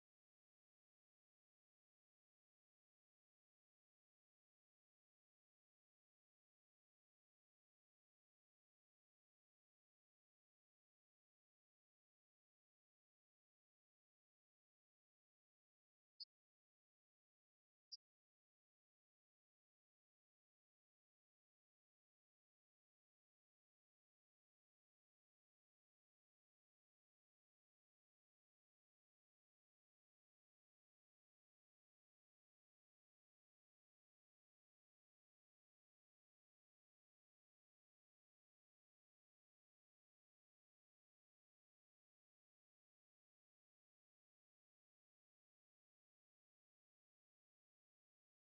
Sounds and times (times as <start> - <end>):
Music: 0.0 - 48.4.